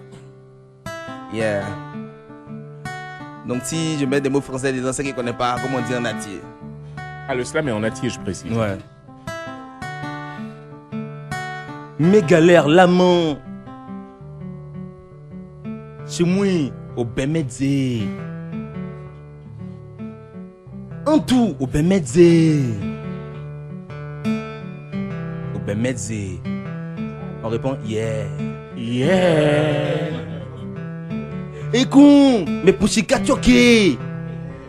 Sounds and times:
Music: 0.0 - 34.6
Speech: 21.1 - 22.8, 31.8 - 34.0.

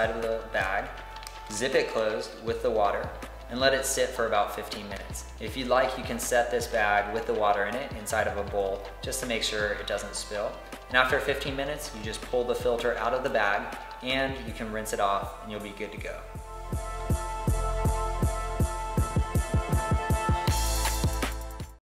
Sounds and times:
Speech: 0.0 - 0.9, 1.5 - 16.3
Music: 0.0 - 21.8.

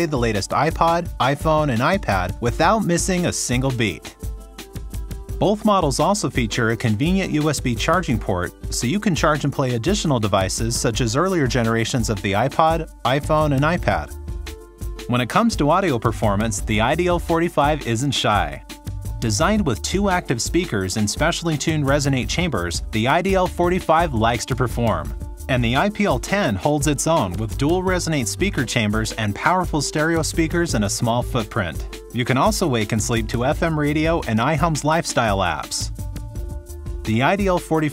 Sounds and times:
Speech: 0.0 - 4.2, 5.4 - 14.1, 15.1 - 18.6, 19.2 - 35.9, 37.1 - 37.9
Music: 0.0 - 37.9.

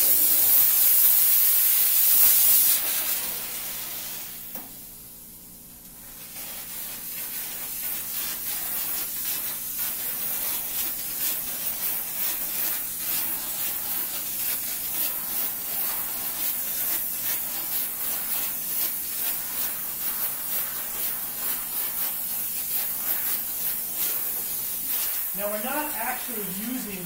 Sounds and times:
Spray: 0.0 - 4.7, 6.0 - 27.0.

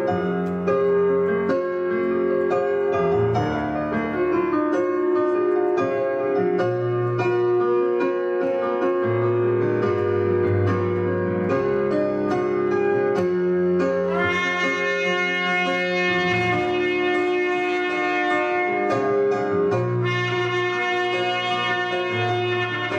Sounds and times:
Music: 0.0 - 22.9.

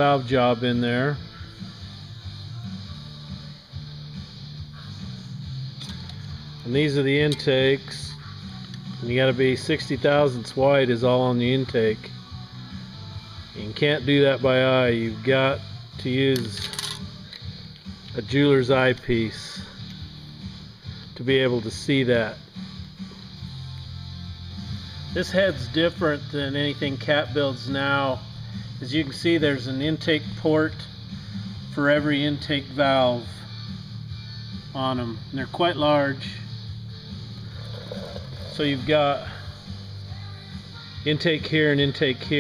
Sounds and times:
Music: 0.0 - 42.4
Speech: 6.7 - 8.2, 13.6 - 16.6, 18.2 - 19.7, 21.2 - 22.4, 25.2 - 28.2, 28.8 - 30.9, 31.8 - 33.3, 34.8 - 36.5, 38.5 - 39.3, 41.1 - 42.4.

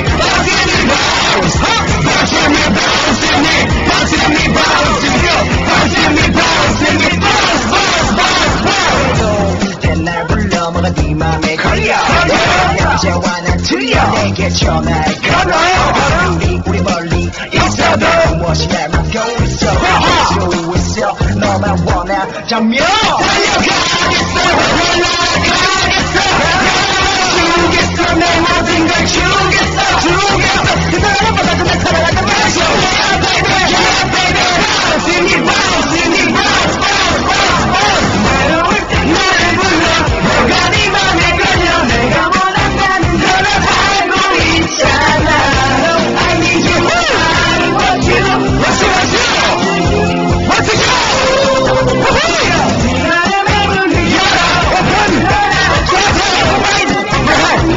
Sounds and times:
Music: 0.0 - 57.7.

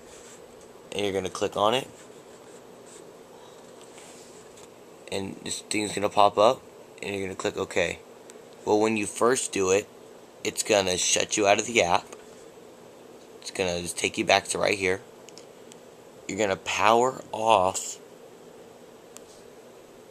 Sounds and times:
Speech: 0.9 - 2.0, 5.1 - 8.0, 8.6 - 12.1, 13.4 - 15.0, 16.3 - 18.0.

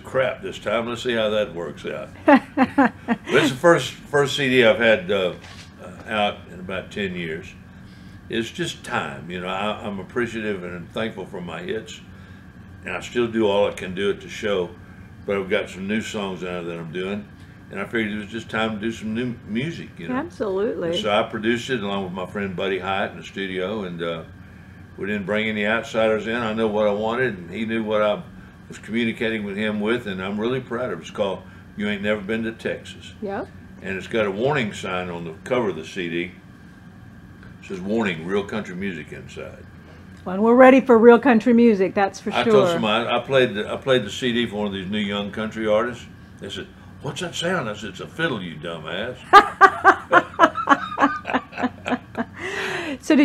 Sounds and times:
Speech: 0.0 - 7.6, 8.3 - 12.0, 12.9 - 24.3, 25.0 - 36.4, 37.6 - 39.6, 40.3 - 49.2.

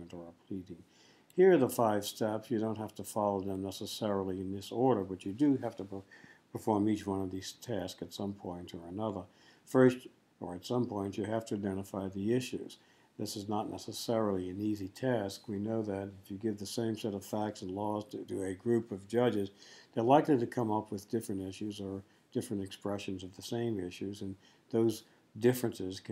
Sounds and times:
Speech: 0.0 - 26.1.

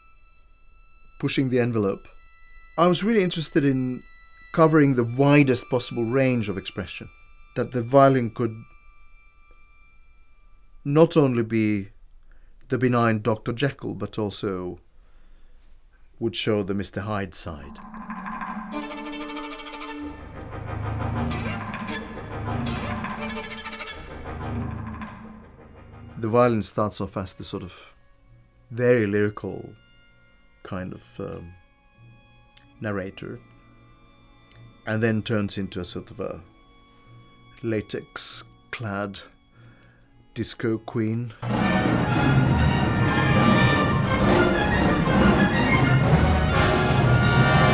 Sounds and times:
Violin, fiddle: 0.0 - 10.8, 18.6 - 25.2, 26.1 - 47.7
Speech: 1.2 - 2.1, 2.8 - 4.0, 4.6 - 8.6, 10.9 - 11.9, 12.7 - 14.8, 16.2 - 17.8, 26.2 - 28.0, 28.7 - 29.8, 30.7 - 31.6, 32.8 - 33.4, 34.9 - 36.5, 37.6 - 39.3, 40.4 - 41.4.

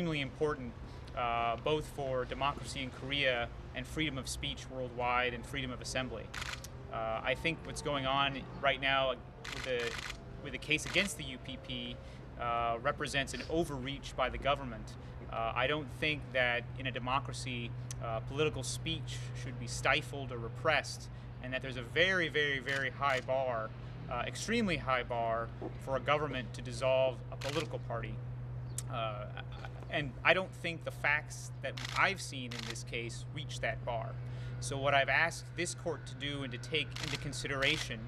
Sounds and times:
Male speech, man speaking: 0.0 - 6.3, 7.0 - 28.2, 28.8 - 38.0
Narration, monologue: 0.0 - 38.0.

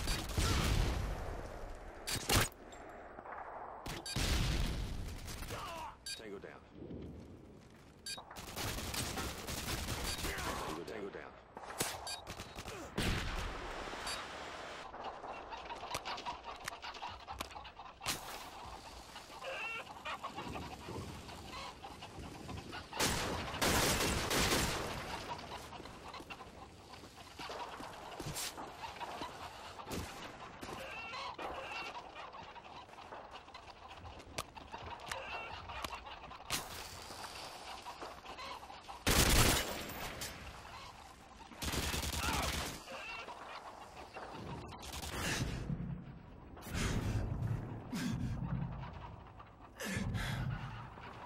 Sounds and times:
Cluck: 15.0 - 23.0, 25.0 - 39.0, 40.6 - 41.6, 42.8 - 44.8, 48.0 - 51.2.

